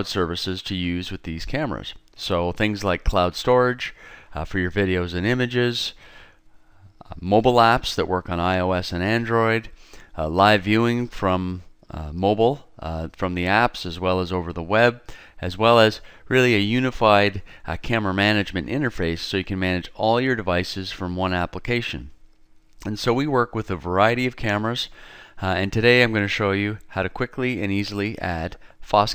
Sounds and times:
Speech: 0.0s - 6.0s, 7.0s - 22.2s, 22.8s - 29.1s.

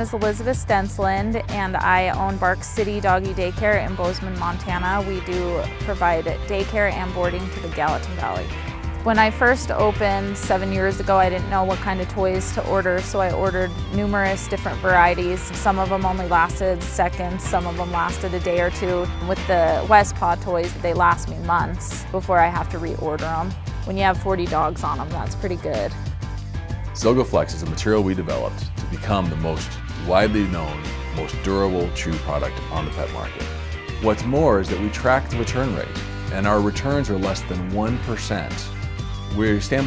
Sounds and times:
Speech: 0.0s - 8.5s, 16.0s - 25.9s, 27.0s - 33.4s, 34.0s - 38.7s, 39.4s - 39.8s
Music: 0.0s - 39.8s.

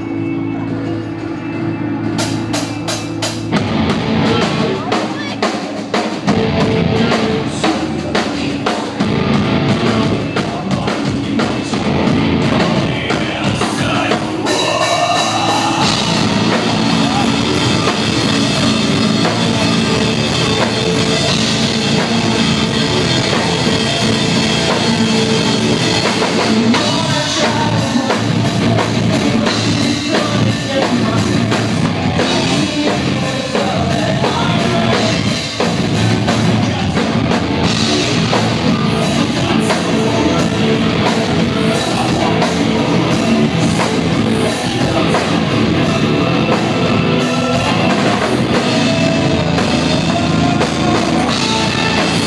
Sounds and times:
Music: 0.0s - 52.2s.

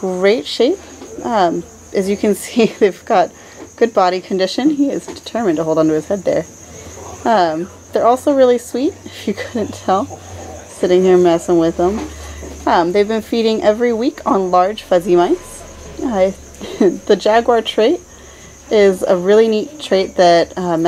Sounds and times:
Speech: 0.0s - 6.5s, 7.2s - 18.0s, 18.7s - 20.8s.

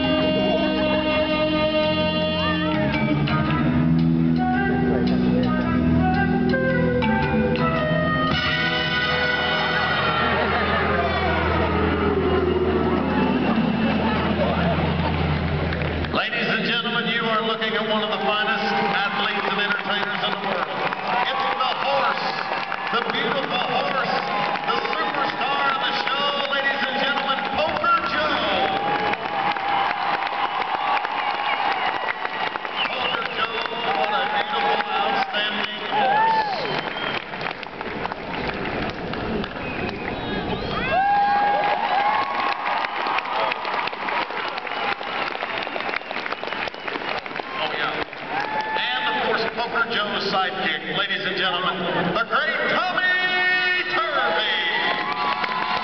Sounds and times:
Speech: 16.1s - 28.8s, 32.9s - 36.5s, 47.6s - 48.0s, 48.8s - 55.0s.

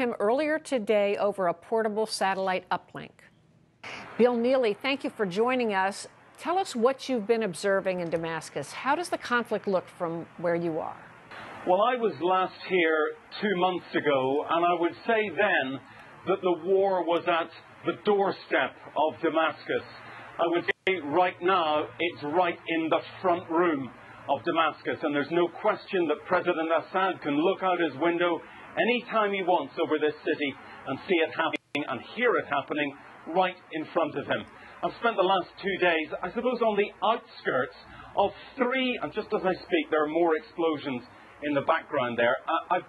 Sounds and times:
Speech: 0.0s - 3.2s, 4.2s - 11.0s, 11.7s - 42.8s.

